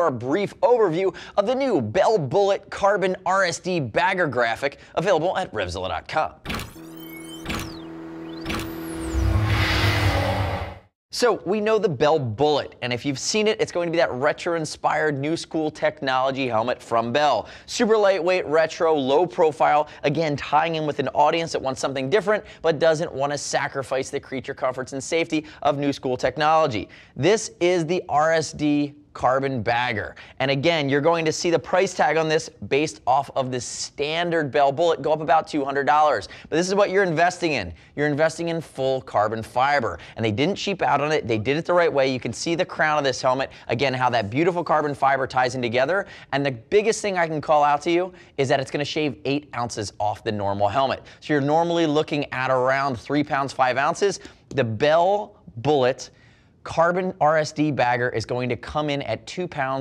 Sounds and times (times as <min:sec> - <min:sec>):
Speech: 0:00.0 - 0:06.4, 0:11.1 - 0:59.8.